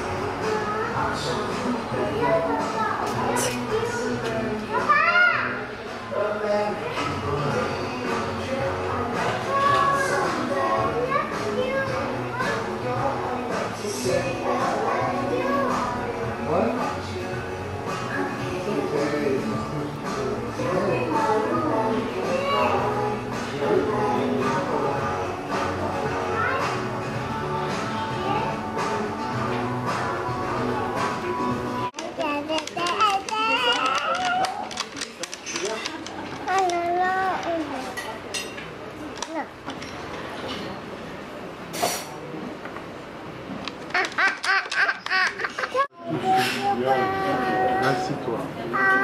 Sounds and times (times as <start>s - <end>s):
Inside, public space: 0.0s - 49.0s
Child speech, kid speaking: 0.4s - 1.4s, 2.0s - 5.7s, 9.4s - 12.7s, 14.5s - 16.0s, 22.2s - 23.0s, 26.2s - 26.8s, 28.0s - 28.6s, 31.8s - 34.8s, 35.8s - 38.2s, 39.0s - 39.8s, 45.6s - 49.0s
Baby laughter: 43.9s - 45.9s.